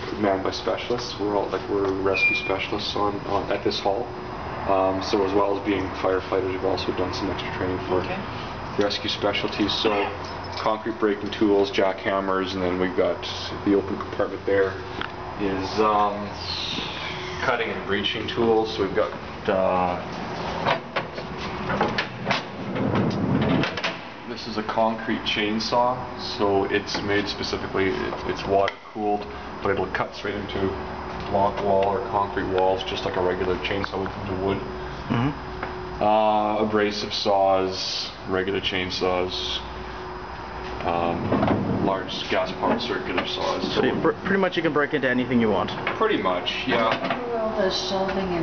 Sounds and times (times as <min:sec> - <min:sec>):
Speech: 0:00.1 - 0:04.1, 0:04.7 - 0:14.8, 0:15.4 - 0:20.1, 0:24.3 - 0:35.4, 0:36.0 - 0:39.7, 0:40.8 - 0:48.4.